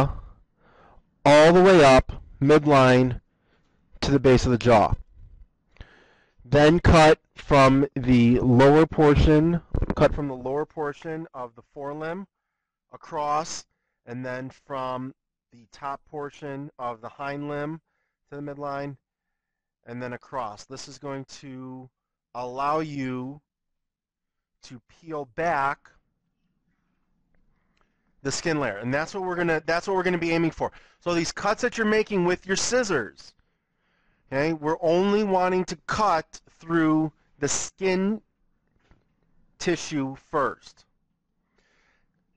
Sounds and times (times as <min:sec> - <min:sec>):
Speech: 0:00.0 - 0:00.3, 0:01.3 - 0:03.2, 0:04.0 - 0:05.0, 0:06.5 - 0:12.3, 0:12.9 - 0:19.0, 0:19.9 - 0:23.5, 0:24.6 - 0:25.9, 0:28.2 - 0:33.4, 0:34.3 - 0:38.2, 0:39.6 - 0:40.8.